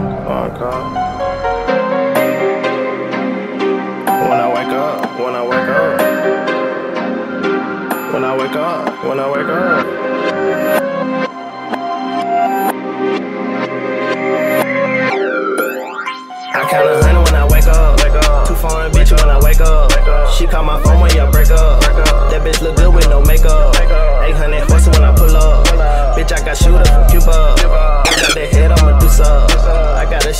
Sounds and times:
Middle Eastern music: 25.8s - 30.0s.

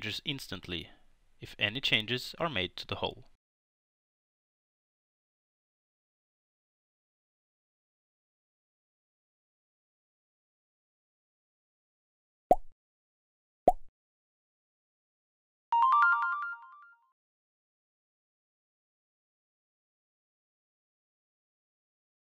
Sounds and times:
Music: 15.8s - 17.0s.

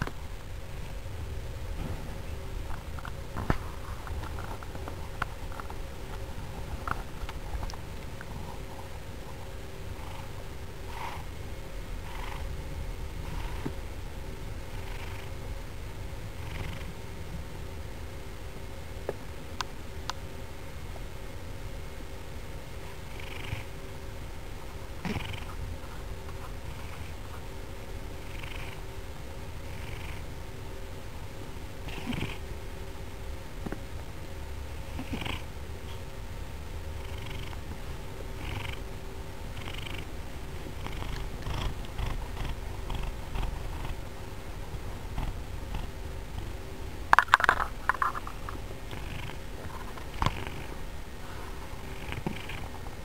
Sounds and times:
Cat: 31.9s - 32.4s.

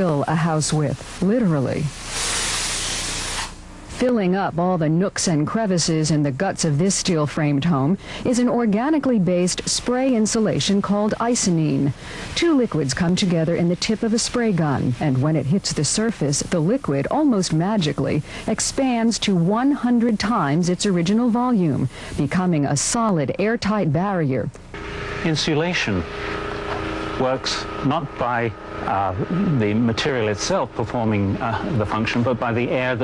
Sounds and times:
Speech: 25.3s - 26.0s, 27.2s - 33.0s.

